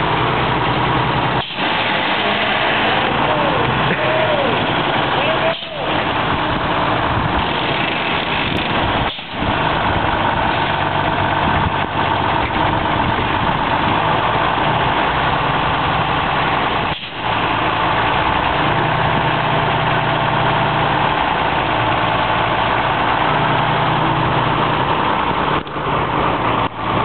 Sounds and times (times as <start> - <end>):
Bus: 0.0 - 27.0
Idling: 0.0 - 27.0
Outside, rural or natural: 0.0 - 27.0.